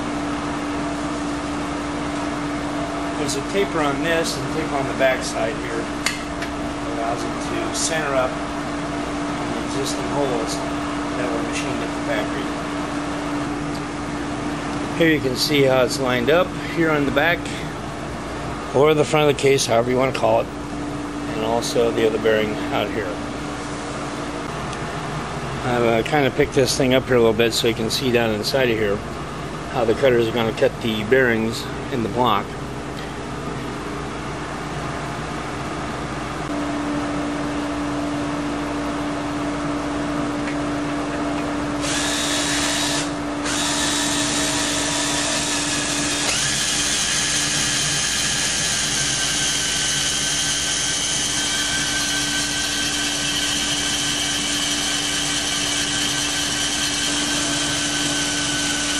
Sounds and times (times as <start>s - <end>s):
Drill: 41.8s - 58.9s.